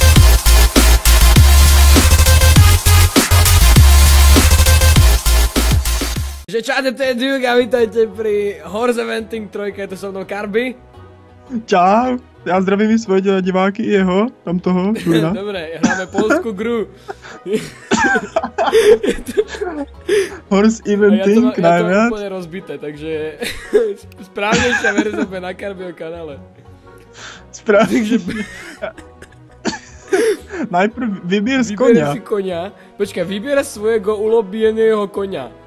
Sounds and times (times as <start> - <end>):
Music: 0.0 - 35.6
Speech: 6.5 - 10.8, 11.5 - 16.9, 20.5 - 26.4, 27.6 - 28.4, 30.7 - 35.5.